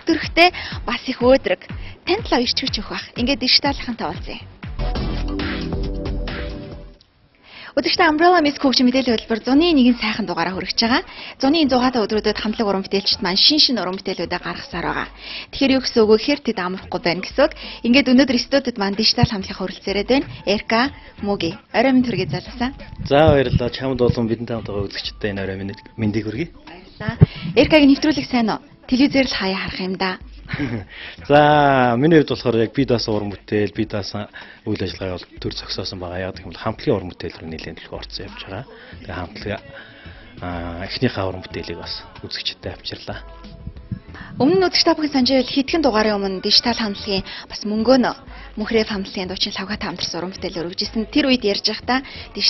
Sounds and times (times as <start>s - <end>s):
Music: 0.0s - 52.5s
Speech: 0.1s - 4.4s, 7.8s - 30.2s, 31.2s - 39.8s, 40.4s - 43.3s, 44.1s - 52.5s.